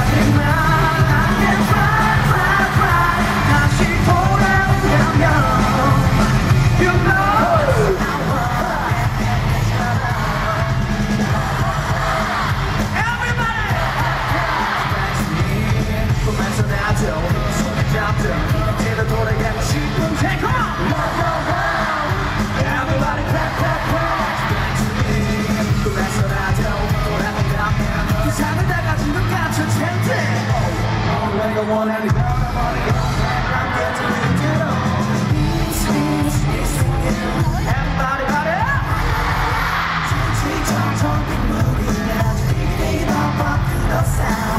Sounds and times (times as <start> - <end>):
Music: 0.0 - 44.5.